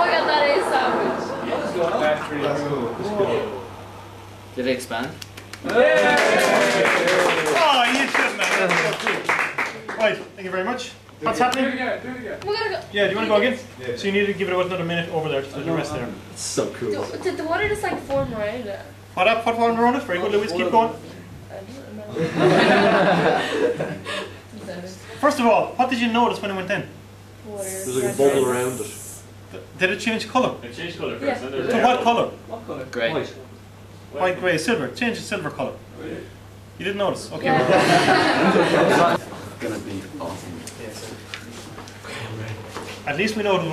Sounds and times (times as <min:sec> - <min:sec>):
Female speech, woman speaking: 0:00.0 - 0:01.4, 0:12.4 - 0:13.6, 0:16.8 - 0:19.0, 0:21.5 - 0:22.4, 0:24.5 - 0:25.2, 0:27.4 - 0:28.8, 0:31.1 - 0:33.4, 0:37.4 - 0:38.0.